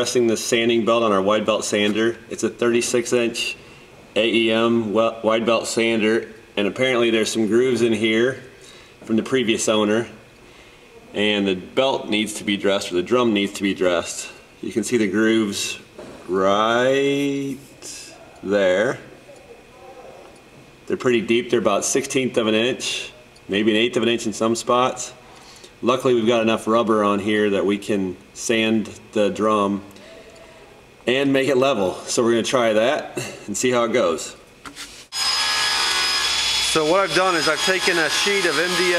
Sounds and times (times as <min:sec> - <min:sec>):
Speech: 0:00.0 - 0:03.6, 0:04.2 - 0:10.2, 0:11.0 - 0:30.3, 0:31.0 - 0:34.4, 0:36.7 - 0:38.9
Drill: 0:35.1 - 0:38.9.